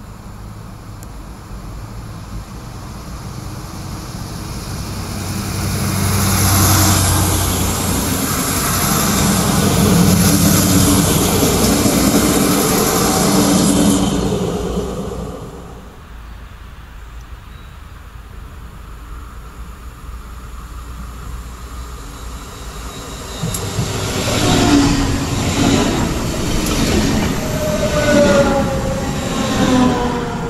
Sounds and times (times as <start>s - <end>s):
Railroad car, train wagon: 0.0s - 30.5s
Subway, metro, underground: 0.0s - 30.5s
Train: 0.0s - 30.5s.